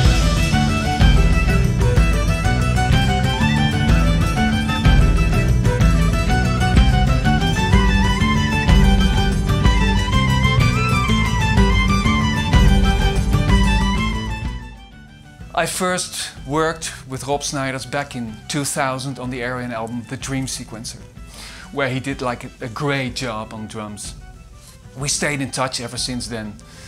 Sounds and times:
Percussion: 0:00.0 - 0:26.8
Speech: 0:15.5 - 0:21.1, 0:21.7 - 0:24.2, 0:25.0 - 0:26.6.

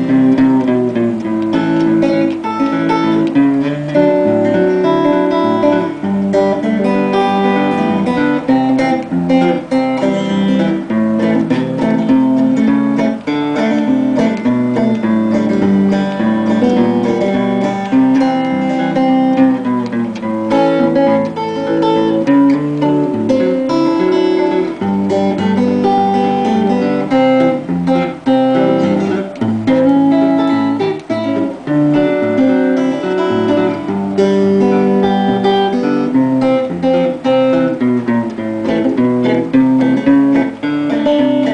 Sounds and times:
Guitar: 0:00.0 - 0:41.5.

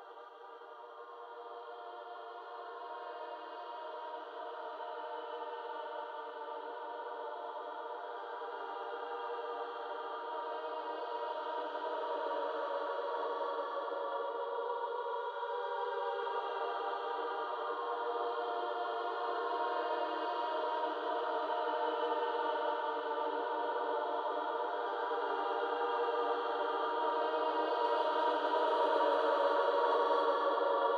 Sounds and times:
Music: 0:00.0 - 0:30.9.

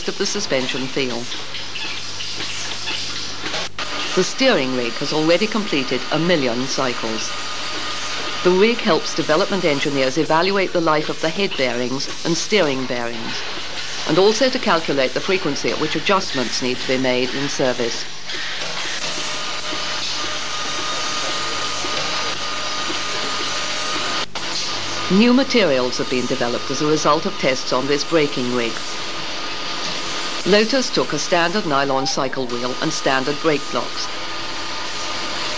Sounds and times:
Speech: 0:00.0 - 0:01.3, 0:04.2 - 0:07.3, 0:08.4 - 0:13.5, 0:14.1 - 0:18.1, 0:25.1 - 0:29.0, 0:30.4 - 0:34.1.

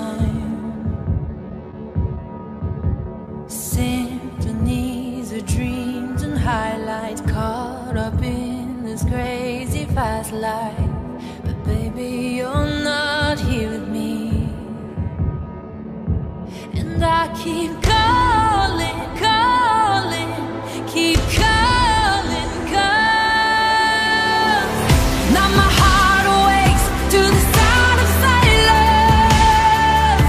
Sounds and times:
Music: 0:00.0 - 0:30.2.

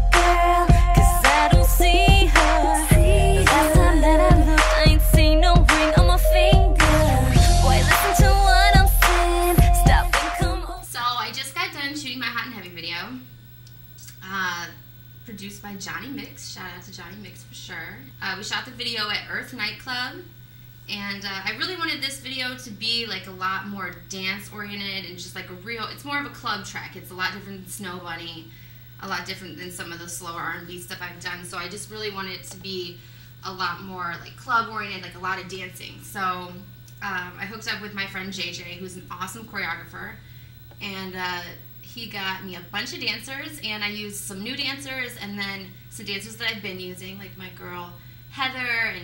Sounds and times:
Speech: 0:10.8 - 0:13.3, 0:14.0 - 0:20.3, 0:20.9 - 0:40.2, 0:40.8 - 0:49.0.

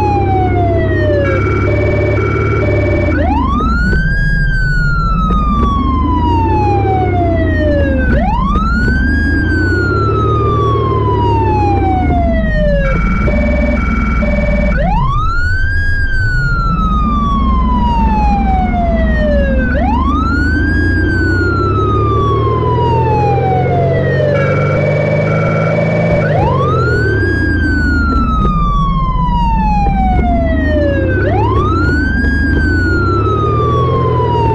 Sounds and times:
Vehicle: 0:00.0 - 0:34.5.

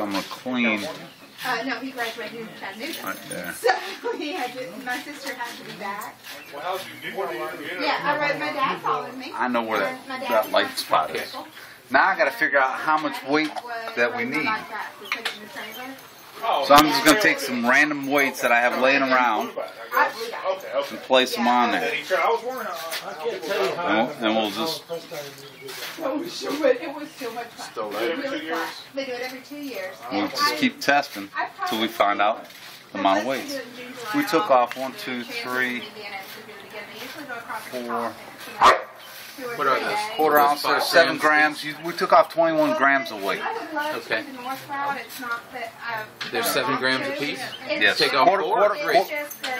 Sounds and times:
Bow-wow: 0:38.6 - 0:39.0.

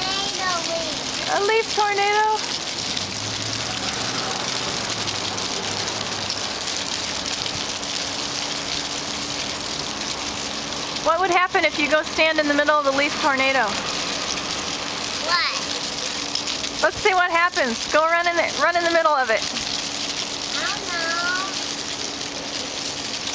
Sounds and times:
Child speech, kid speaking: 0:00.0 - 0:01.1, 0:15.2 - 0:15.8, 0:20.5 - 0:21.6.

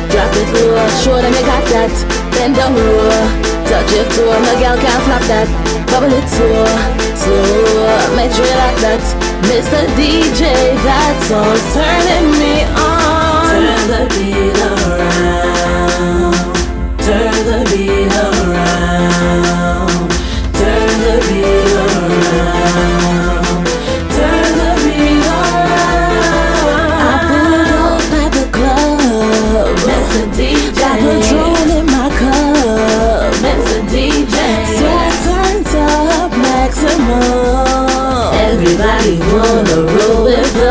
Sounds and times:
Reggae: 0:00.0 - 0:40.7
Song: 0:00.0 - 0:40.7.

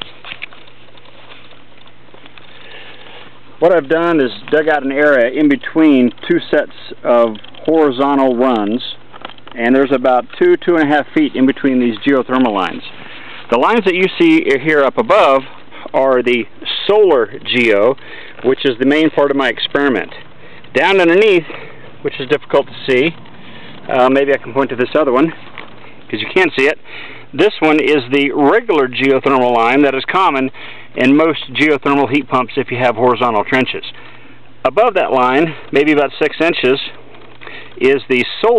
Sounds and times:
Speech: 0:03.6 - 0:09.0, 0:09.6 - 0:12.9, 0:13.5 - 0:23.2, 0:23.9 - 0:25.4, 0:26.1 - 0:26.8, 0:27.4 - 0:34.0, 0:34.6 - 0:37.0, 0:37.8 - 0:38.5.

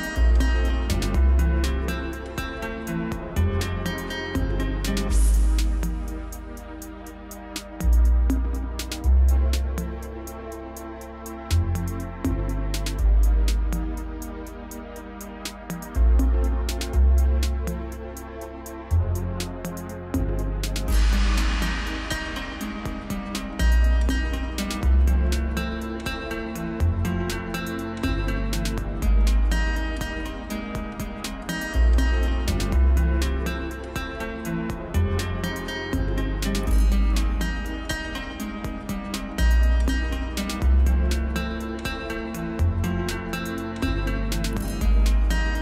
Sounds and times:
Music: 0:00.0 - 0:45.6.

